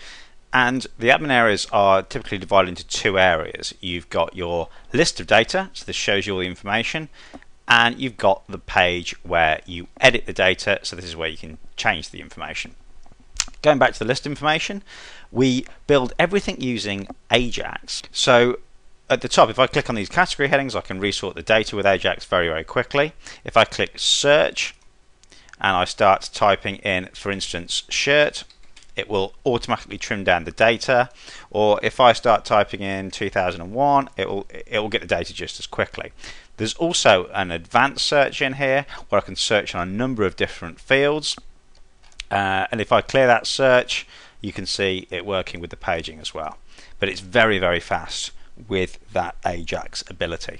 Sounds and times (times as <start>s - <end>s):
Speech: 0.5s - 12.8s, 13.4s - 24.8s, 25.6s - 41.5s, 42.2s - 50.6s.